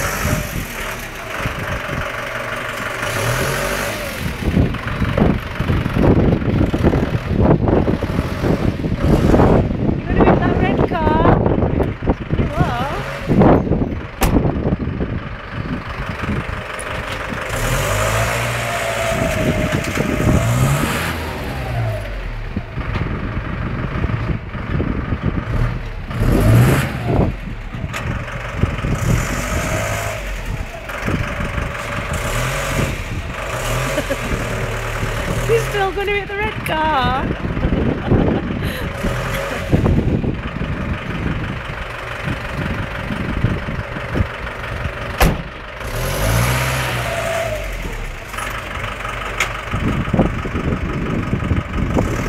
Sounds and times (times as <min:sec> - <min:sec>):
Car: 0:00.0 - 0:52.2.